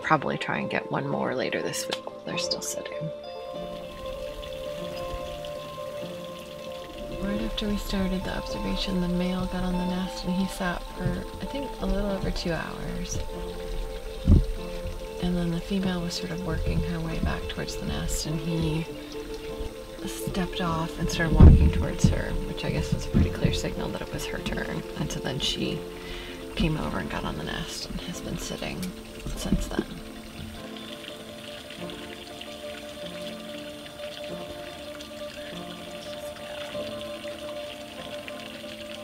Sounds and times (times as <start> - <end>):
Speech: 0.0 - 3.2, 7.2 - 13.2, 15.2 - 18.9, 20.0 - 25.8, 26.6 - 30.0
Music: 0.0 - 39.0
Outside, rural or natural: 0.0 - 39.0.